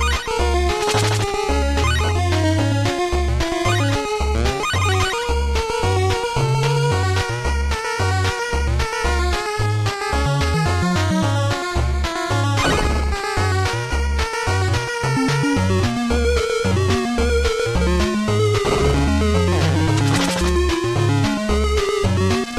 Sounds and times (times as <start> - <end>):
Music: 0.0 - 22.5.